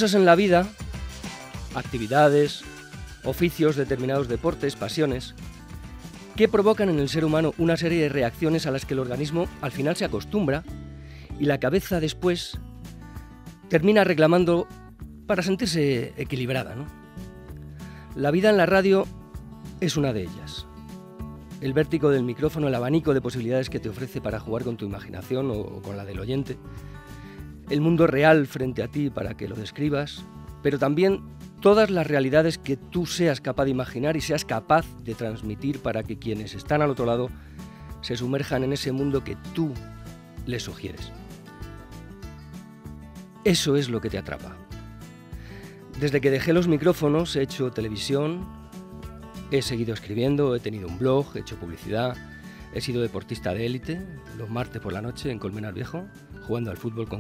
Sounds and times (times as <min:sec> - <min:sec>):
Speech: 0:00.0 - 0:00.8, 0:01.7 - 0:05.3, 0:06.4 - 0:10.7, 0:11.4 - 0:12.6, 0:13.7 - 0:14.7, 0:15.3 - 0:16.9, 0:18.2 - 0:19.1, 0:19.8 - 0:20.7, 0:21.6 - 0:26.6, 0:27.7 - 0:37.4, 0:38.0 - 0:39.8, 0:40.4 - 0:41.2, 0:43.4 - 0:44.6, 0:46.0 - 0:48.5, 0:49.5 - 0:57.2
Music: 0:00.0 - 0:57.2.